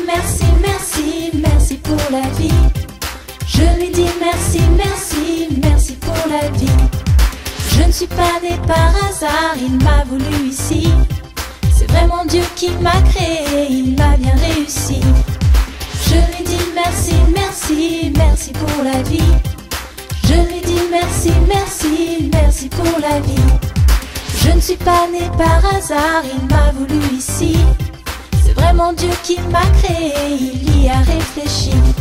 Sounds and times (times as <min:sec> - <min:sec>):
Singing: 0:00.0 - 0:02.7, 0:03.5 - 0:07.0, 0:07.7 - 0:15.3, 0:16.0 - 0:19.6, 0:20.2 - 0:23.6, 0:24.4 - 0:27.8, 0:28.4 - 0:32.0
Music: 0:00.0 - 0:32.0.